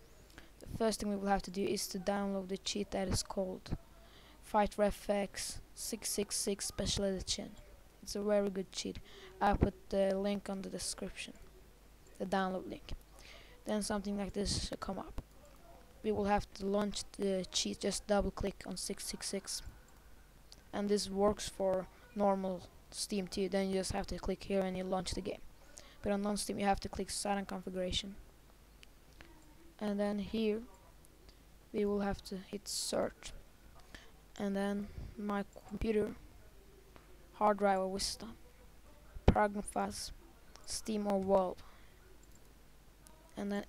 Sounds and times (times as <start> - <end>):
Speech: 0.6 - 19.8, 20.6 - 28.2, 29.2 - 31.0, 31.7 - 33.4, 34.4 - 42.2, 43.0 - 43.6.